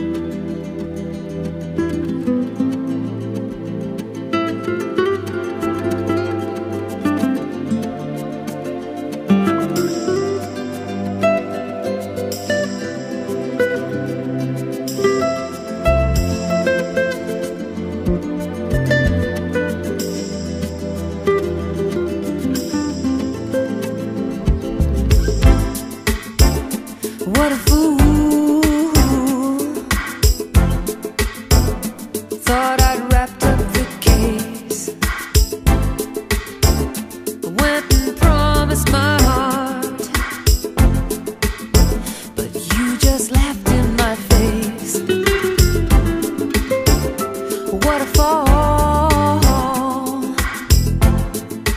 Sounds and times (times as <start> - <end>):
Music: 0.0 - 51.7.